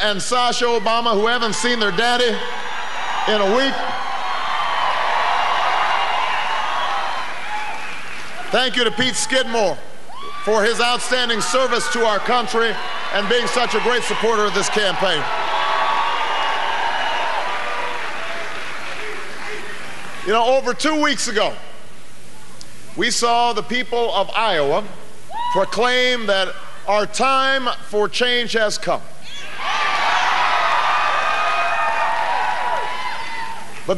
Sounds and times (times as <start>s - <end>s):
Male speech, man speaking: 0.0s - 2.4s, 3.3s - 3.9s, 8.5s - 9.8s, 10.5s - 15.3s, 20.3s - 21.6s, 23.0s - 29.1s
Narration, monologue: 0.0s - 4.2s, 8.3s - 15.4s, 20.0s - 29.2s.